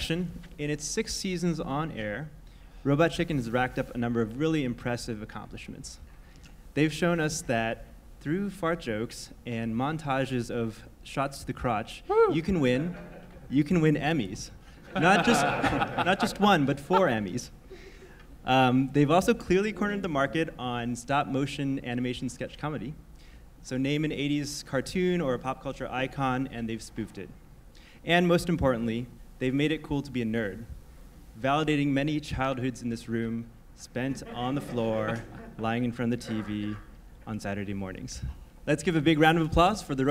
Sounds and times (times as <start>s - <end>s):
Speech: 0.0s - 6.0s, 6.8s - 17.5s, 18.4s - 23.0s, 23.6s - 27.4s, 28.1s - 30.7s, 31.4s - 40.1s.